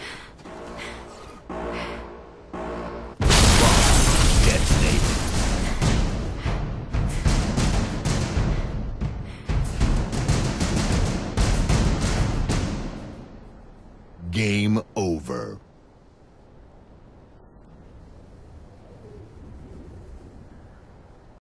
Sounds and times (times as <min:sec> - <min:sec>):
Speech: 0:14.2 - 0:15.6.